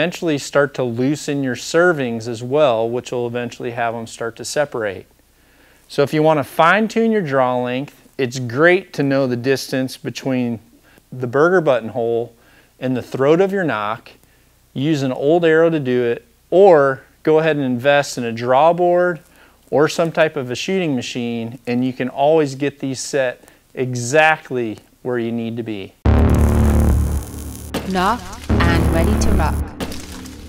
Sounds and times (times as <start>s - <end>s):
Speech: 0.0s - 5.1s, 5.9s - 14.2s, 14.8s - 26.0s, 27.9s - 29.6s
Music: 28.4s - 30.4s.